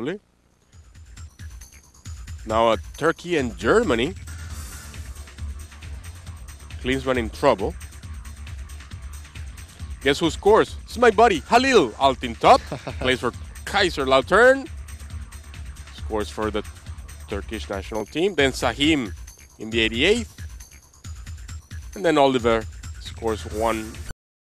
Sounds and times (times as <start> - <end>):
Speech: 0.0 - 0.2, 2.5 - 4.2, 6.8 - 7.8, 10.0 - 14.7, 16.0 - 16.6, 17.3 - 20.3, 22.0 - 24.0
Music: 0.0 - 24.2.